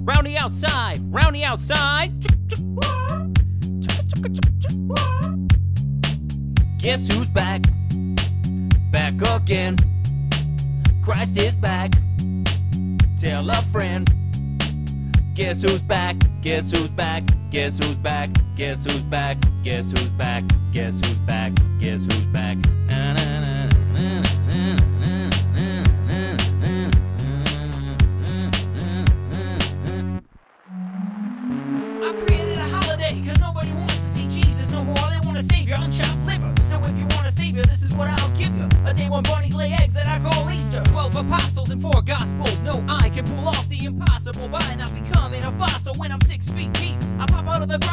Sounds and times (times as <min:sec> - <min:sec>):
Rhythm and blues: 0:00.0 - 0:47.9.